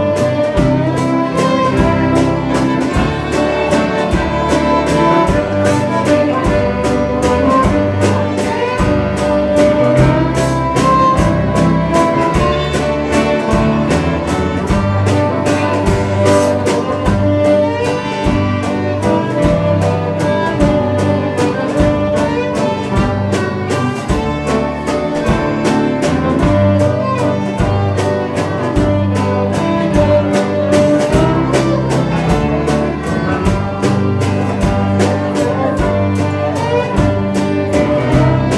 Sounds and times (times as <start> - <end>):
Violin, fiddle: 0.0 - 38.5.